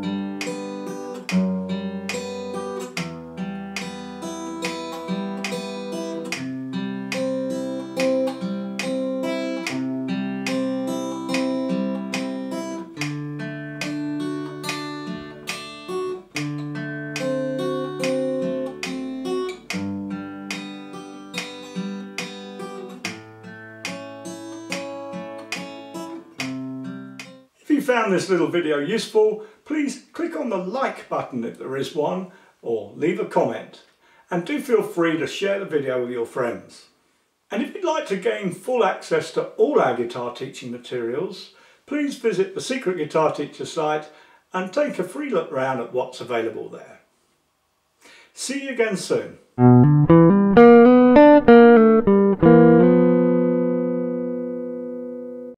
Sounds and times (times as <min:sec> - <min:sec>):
Guitar: 0:00.0 - 0:27.5, 0:49.6 - 0:55.5
Inside, small room: 0:00.0 - 0:55.5
Speech: 0:27.6 - 0:47.1, 0:48.4 - 0:49.5.